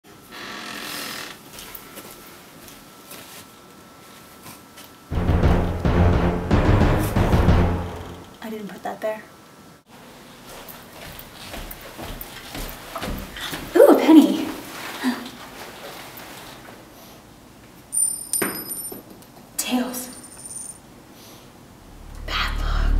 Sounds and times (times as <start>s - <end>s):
Music: 5.1s - 8.4s
Speech: 8.4s - 9.3s, 13.7s - 15.3s, 19.6s - 20.2s.